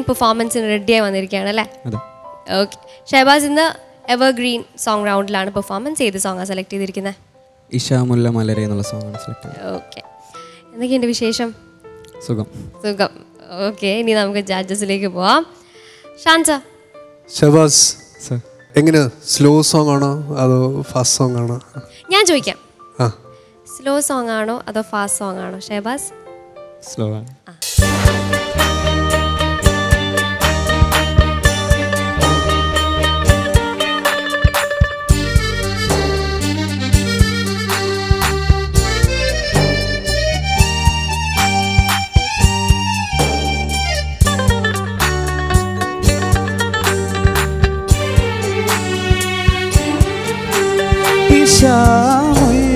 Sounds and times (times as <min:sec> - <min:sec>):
Music: 0:00.0 - 0:52.7.